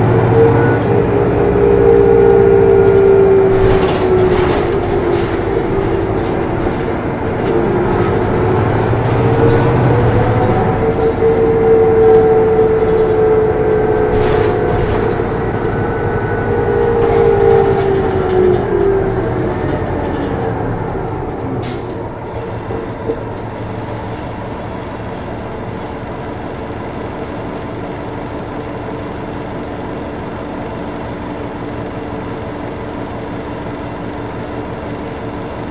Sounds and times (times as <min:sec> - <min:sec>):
Bus: 0:00.0 - 0:35.7.